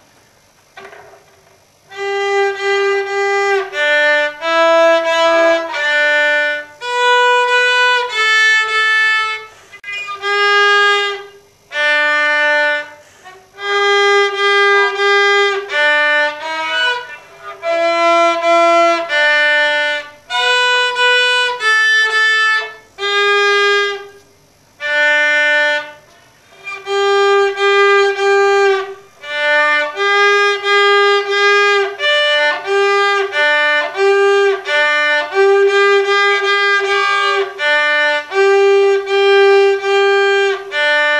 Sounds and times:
Violin, fiddle: 1.9s - 24.1s, 24.8s - 41.1s.

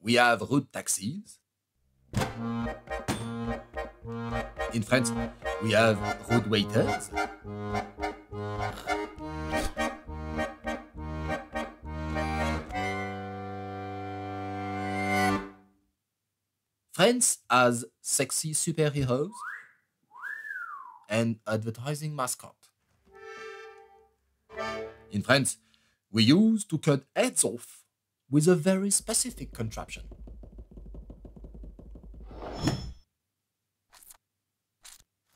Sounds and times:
Speech: 0.0s - 1.4s, 4.7s - 7.1s, 16.9s - 19.4s, 21.1s - 22.7s, 25.1s - 30.1s
Music: 2.2s - 15.7s, 23.1s - 25.2s
Whistling: 19.3s - 21.1s.

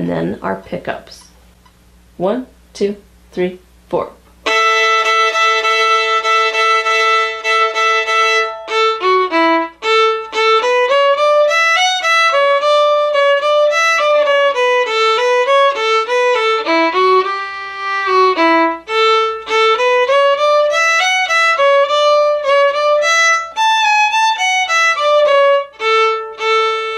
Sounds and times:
Violin, fiddle: 4.5s - 26.9s.

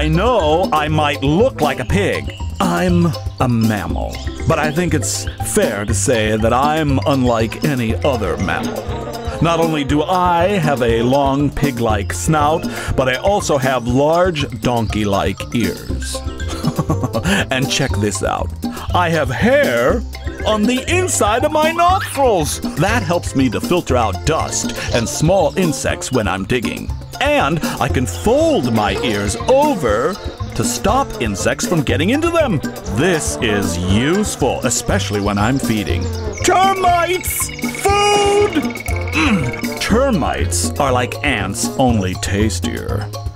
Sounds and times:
Speech: 0.0s - 8.8s, 9.4s - 16.2s, 17.5s - 38.6s, 39.2s - 43.1s
Music: 0.0s - 43.3s
Outside, rural or natural: 0.0s - 43.3s.

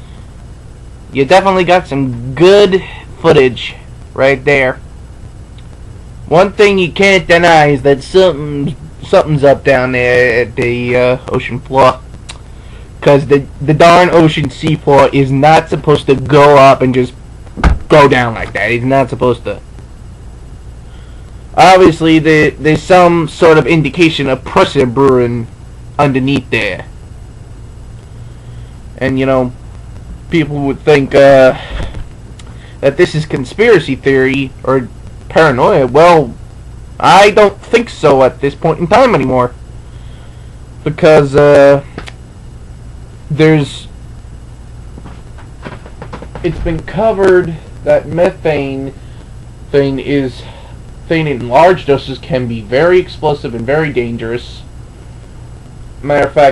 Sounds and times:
Speech: 1.1s - 4.8s, 6.3s - 12.0s, 13.0s - 17.2s, 17.9s - 19.6s, 21.6s - 26.9s, 29.0s - 29.6s, 30.3s - 31.7s, 32.8s - 36.4s, 37.0s - 39.6s, 40.8s - 41.9s, 43.3s - 43.9s, 46.4s - 49.0s, 49.7s - 54.7s, 56.0s - 56.5s.

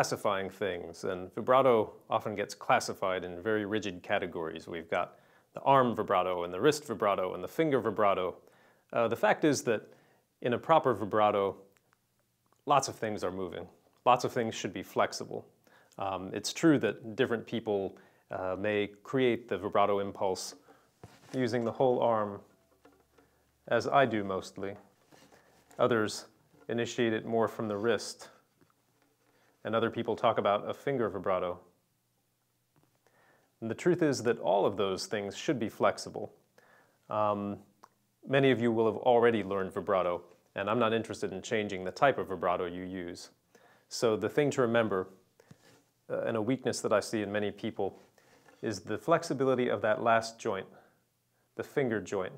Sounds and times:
Speech: 0.0s - 11.7s, 12.6s - 20.6s, 21.3s - 22.5s, 23.7s - 24.9s, 25.8s - 28.5s, 29.6s - 31.7s, 33.6s - 36.4s, 37.1s - 45.2s, 46.1s - 48.0s, 48.6s - 51.0s, 51.6s - 52.3s.

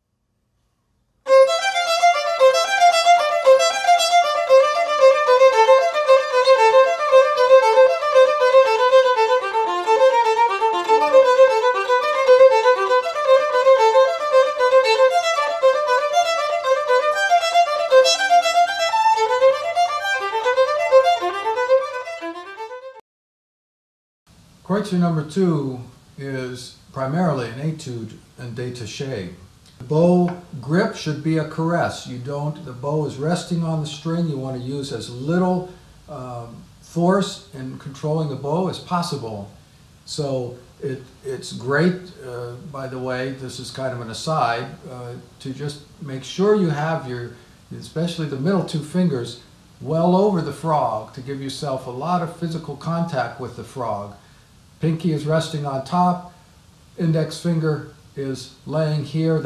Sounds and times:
Speech: 24.7s - 54.2s, 54.8s - 56.3s, 57.0s - 59.4s.

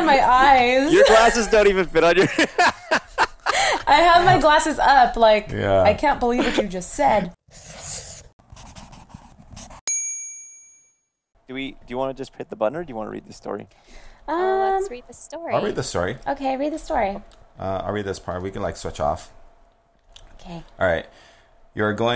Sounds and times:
Speech: 11.5s - 13.7s.

